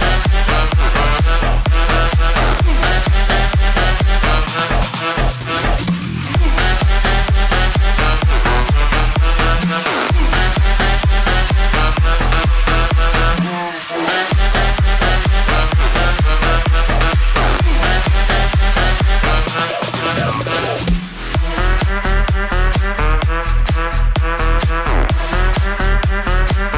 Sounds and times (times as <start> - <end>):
Drum and bass: 0.0 - 26.7.